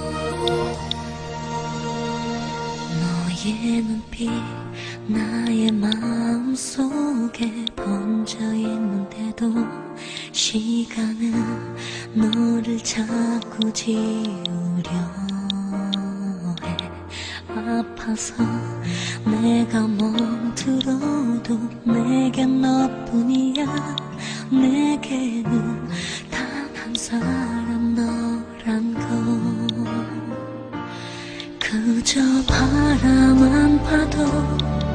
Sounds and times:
Music: 0.0s - 34.9s.

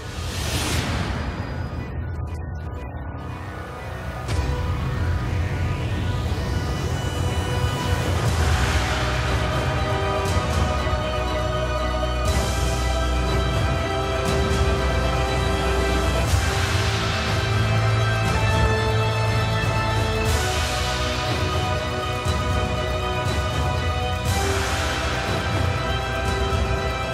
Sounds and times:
Background music: 0.0s - 27.1s.

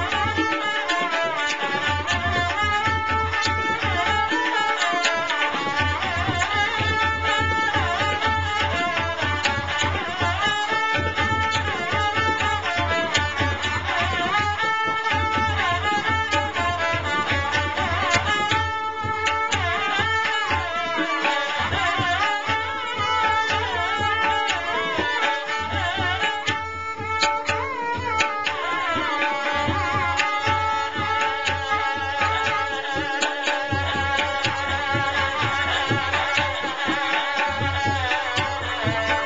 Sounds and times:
Traditional music: 0.0s - 39.2s.

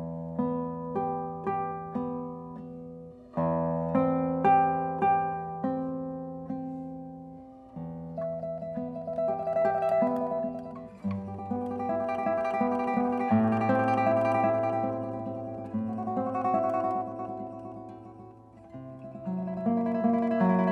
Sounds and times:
Guitar: 0.0s - 20.7s
Mandolin: 0.0s - 20.7s.

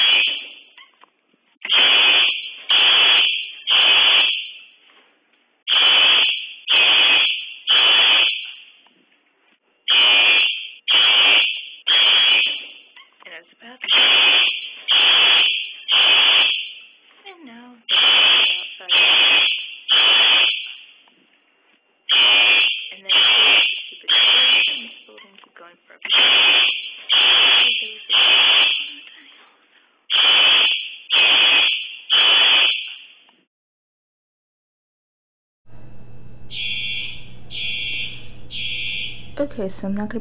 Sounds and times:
Buzzer: 0.0s - 0.5s, 5.7s - 8.5s, 9.9s - 12.7s, 13.9s - 16.8s, 17.9s - 20.8s, 22.1s - 24.9s, 26.1s - 29.0s, 30.1s - 33.0s, 36.4s - 39.4s.

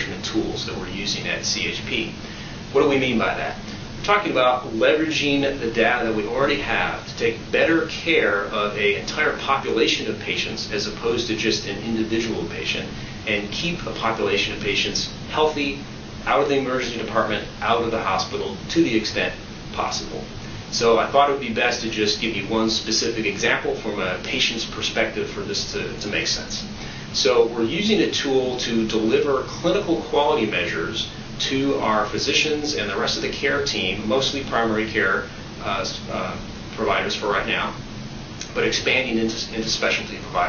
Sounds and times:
Speech: 0.0s - 37.8s, 38.4s - 40.4s.

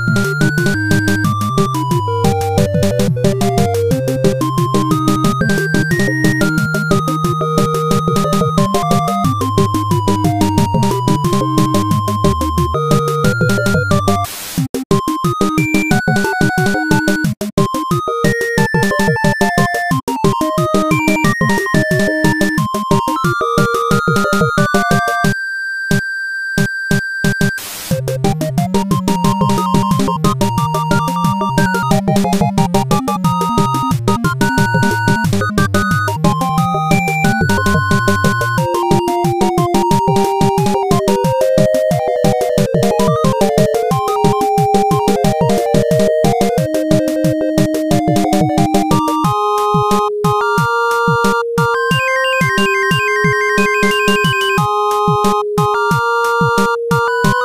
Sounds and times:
Video game music: 0.0s - 57.4s.

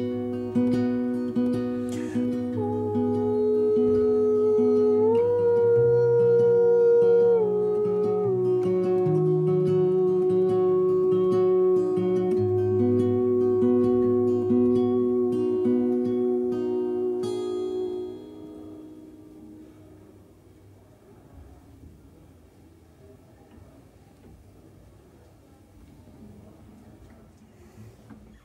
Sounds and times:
Acoustic guitar: 0.0s - 24.5s.

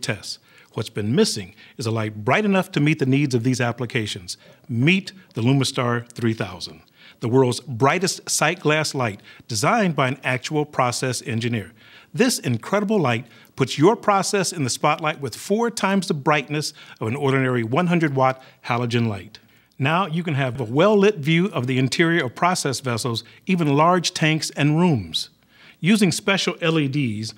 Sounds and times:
Speech: 0.0s - 27.3s.

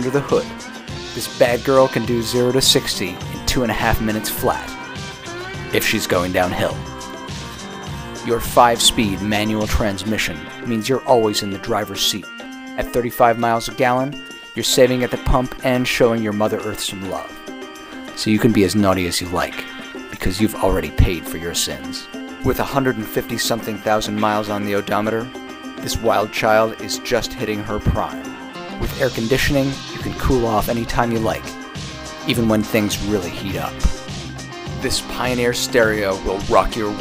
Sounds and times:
Speech: 0.0s - 0.6s, 1.2s - 4.8s, 5.7s - 6.9s, 8.3s - 17.4s, 18.2s - 31.6s, 32.3s - 34.0s, 34.8s - 37.0s
Music: 0.0s - 37.0s.

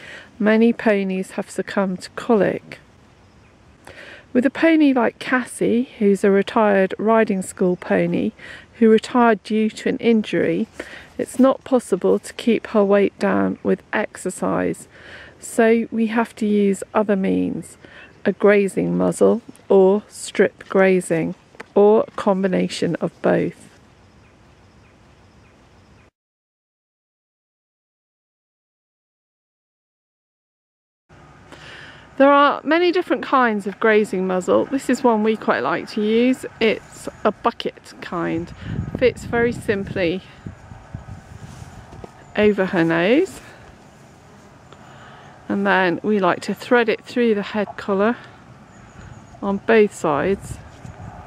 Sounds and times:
Speech: 0.4s - 2.8s, 4.3s - 23.7s, 32.2s - 40.4s, 42.4s - 43.6s, 45.5s - 48.3s, 49.4s - 50.6s.

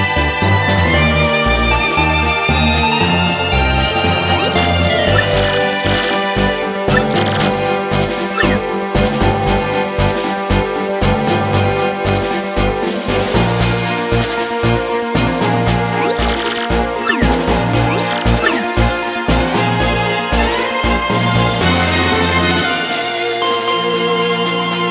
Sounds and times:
Video game music: 0.0s - 24.9s.

